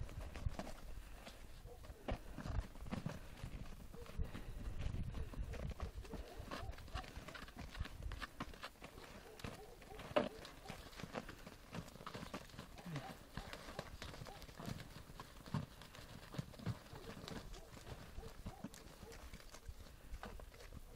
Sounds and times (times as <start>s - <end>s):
Animal: 0.3s - 20.9s.